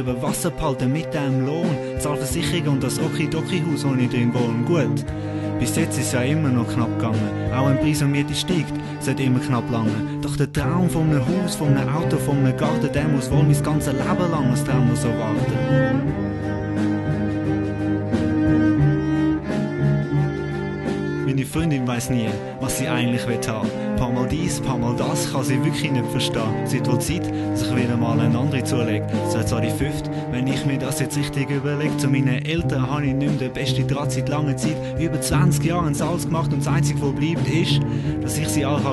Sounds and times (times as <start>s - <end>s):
Speech: 0.0s - 15.8s, 21.3s - 38.9s
Music: 0.0s - 38.9s.